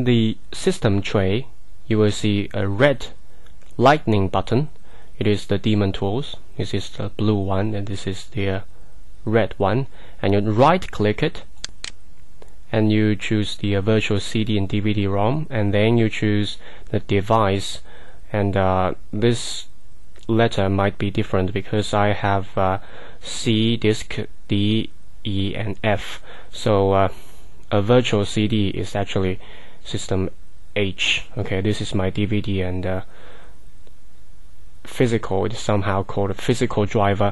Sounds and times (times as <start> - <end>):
Speech: 0.0 - 3.2, 3.8 - 11.5, 12.7 - 33.1, 34.8 - 37.3.